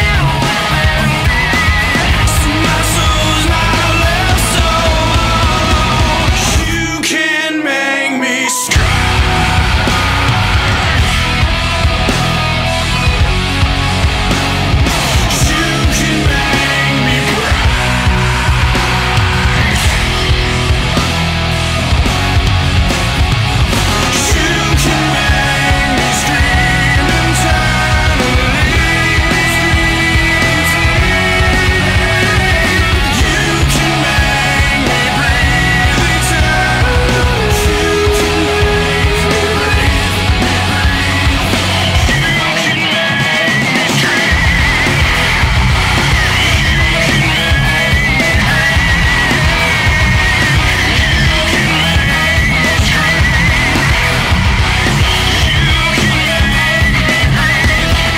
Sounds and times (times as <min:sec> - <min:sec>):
Angry music: 0:00.0 - 0:58.1.